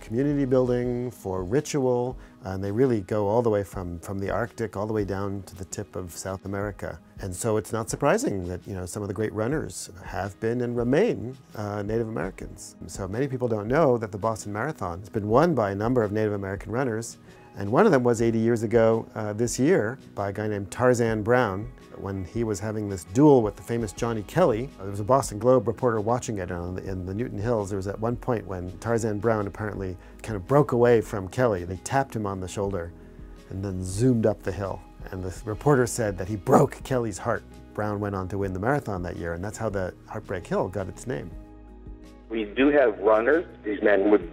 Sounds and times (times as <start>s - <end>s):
Speech: 0.0s - 32.9s, 33.5s - 41.4s, 42.3s - 44.3s
Inside, small room: 0.0s - 44.3s
Music: 0.0s - 44.3s.